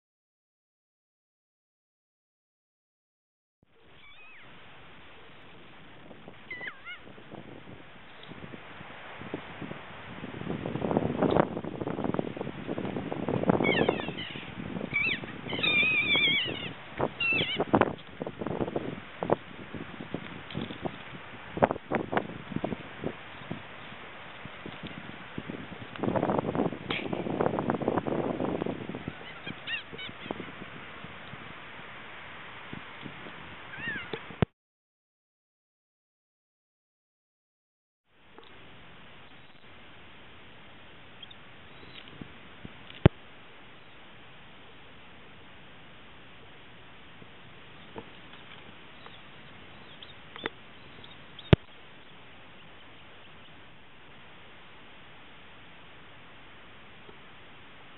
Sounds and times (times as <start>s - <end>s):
Bird: 3.8s - 4.5s, 6.5s - 7.1s, 13.6s - 17.7s, 29.1s - 30.4s, 33.7s - 34.2s, 41.2s - 42.1s, 47.8s - 53.6s.